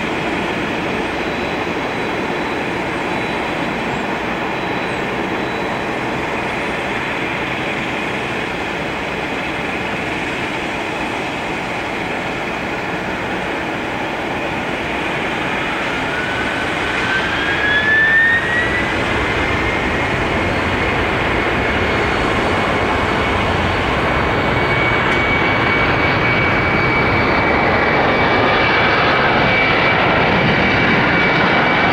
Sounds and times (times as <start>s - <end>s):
Fixed-wing aircraft, airplane: 0.0s - 31.9s.